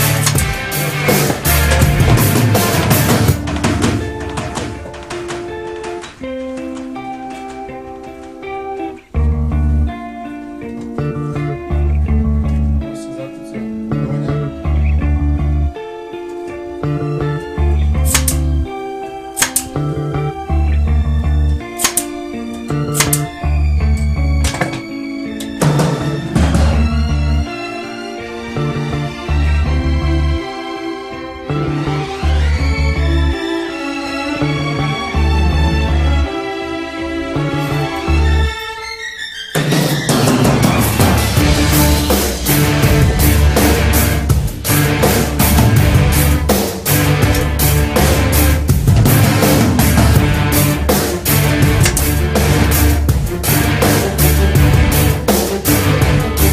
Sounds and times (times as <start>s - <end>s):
Blues: 0.0s - 38.9s, 39.5s - 56.5s
Speech: 12.5s - 14.6s.